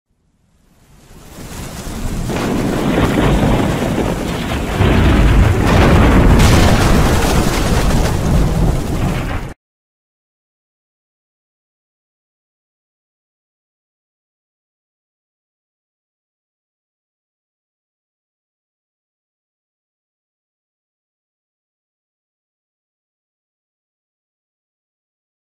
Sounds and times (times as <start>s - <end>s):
Eruption: 0.1s - 9.6s.